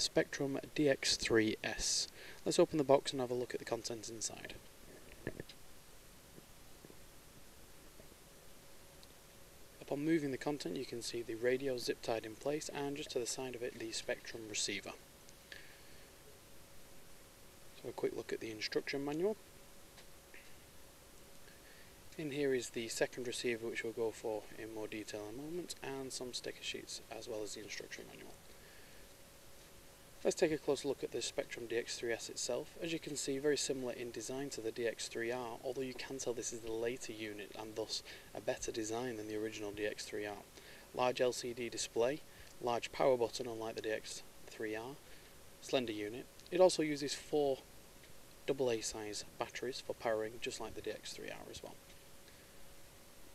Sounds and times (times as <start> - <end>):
Speech: 0.0 - 4.6, 9.8 - 15.0, 17.8 - 19.4, 22.2 - 28.4, 30.2 - 45.0, 45.6 - 47.6, 48.5 - 51.8.